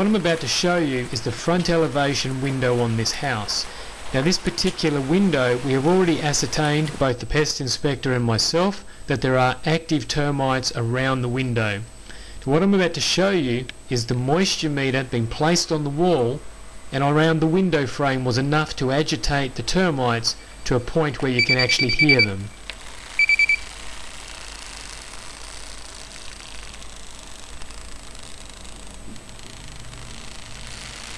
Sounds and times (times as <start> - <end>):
Speech: 0.0 - 22.5.